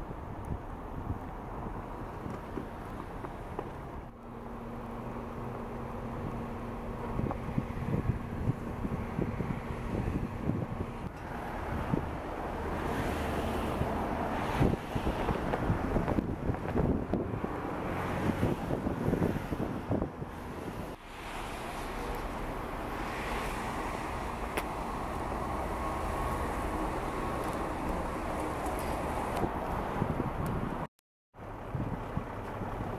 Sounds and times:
Outside, urban or manmade: 0.0s - 32.9s.

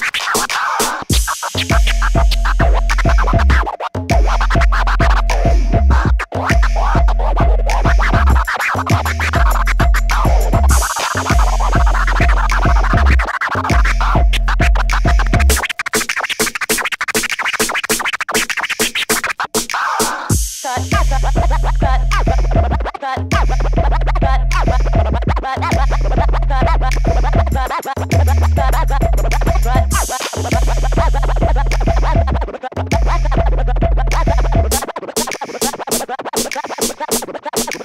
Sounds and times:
Electronic music: 0.0s - 37.8s
Scratching (performance technique): 0.0s - 37.8s.

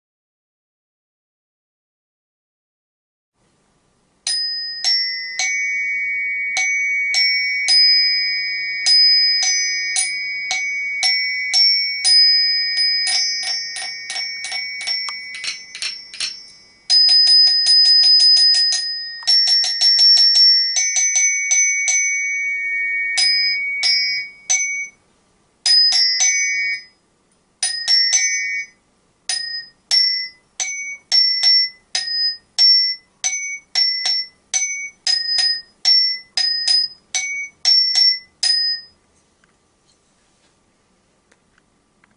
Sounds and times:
Glockenspiel: 4.3s - 25.0s, 25.6s - 27.0s, 27.6s - 39.0s.

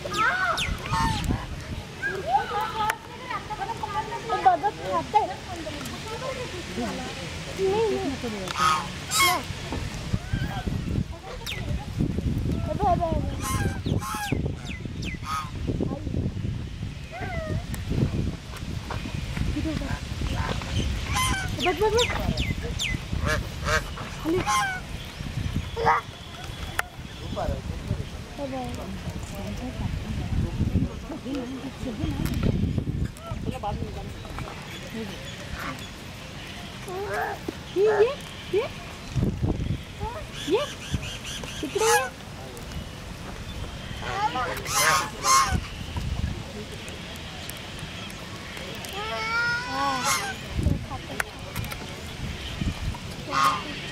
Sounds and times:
Quack: 8.6s - 9.4s, 13.4s - 14.4s, 15.2s - 15.5s, 21.1s - 21.7s, 23.2s - 24.8s, 41.5s - 42.2s, 44.0s - 45.8s, 50.0s - 50.4s, 53.3s - 53.9s.

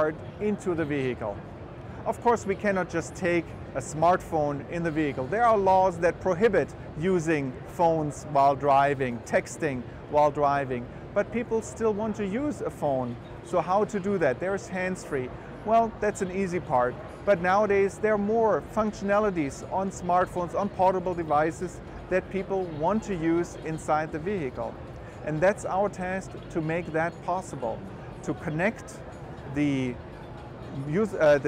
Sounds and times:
Speech: 0.0s - 1.4s, 2.0s - 30.0s, 30.7s - 31.4s.

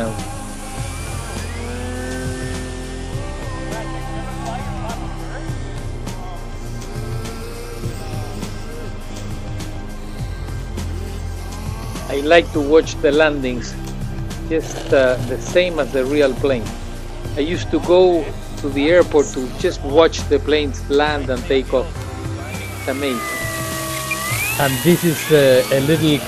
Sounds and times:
Music: 0.0s - 26.2s.

